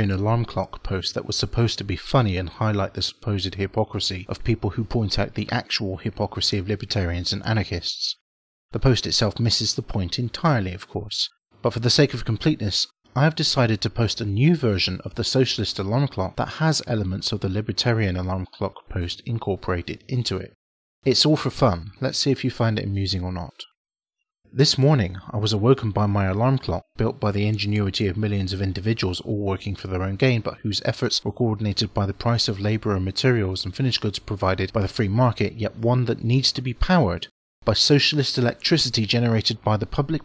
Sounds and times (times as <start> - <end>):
Speech: 0.0 - 23.8, 24.6 - 40.2.